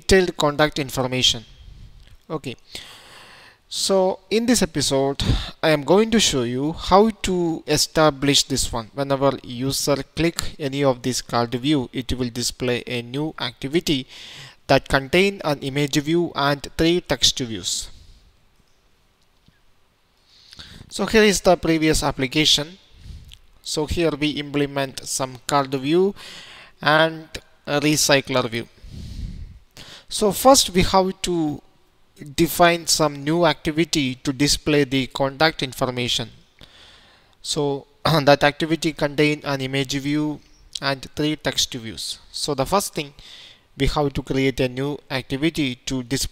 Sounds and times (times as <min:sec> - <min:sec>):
Speech: 0:00.0 - 0:01.5, 0:02.3 - 0:02.6, 0:03.7 - 0:14.1, 0:14.7 - 0:18.0, 0:20.9 - 0:22.8, 0:23.6 - 0:26.2, 0:26.8 - 0:28.7, 0:30.1 - 0:31.6, 0:32.2 - 0:36.4, 0:37.4 - 0:43.2, 0:43.8 - 0:46.3.